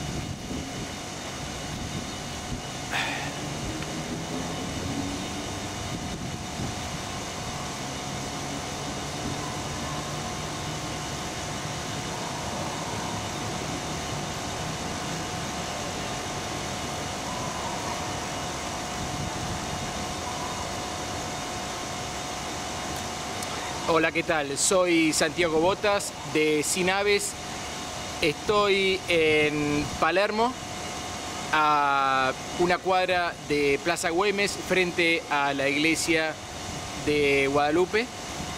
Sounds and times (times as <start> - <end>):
Outside, urban or manmade: 0.0 - 38.5
Speech: 23.9 - 27.4, 28.2 - 30.6, 31.6 - 36.4, 37.0 - 38.1.